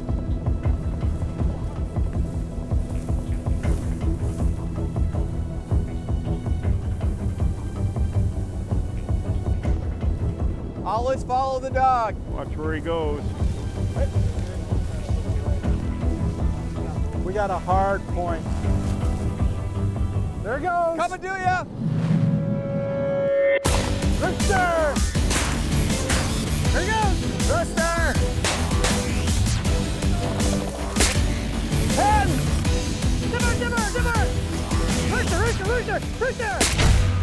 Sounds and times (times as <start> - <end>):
Music: 0.0 - 37.2.